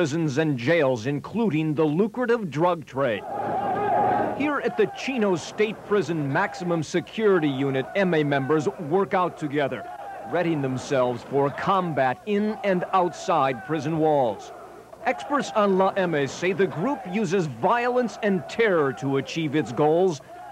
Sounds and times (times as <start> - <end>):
Speech: 0.0 - 3.2, 4.4 - 20.4.